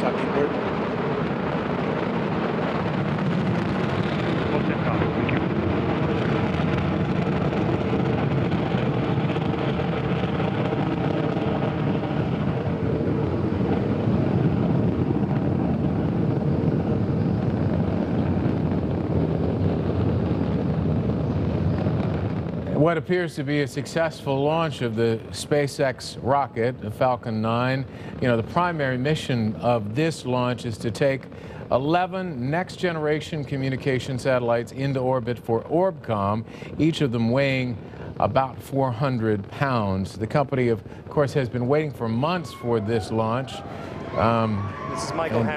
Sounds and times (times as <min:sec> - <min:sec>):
Wind noise (microphone): 0:00.0 - 0:22.9
Speech: 0:04.5 - 0:05.4, 0:22.7 - 0:43.6, 0:44.2 - 0:45.5.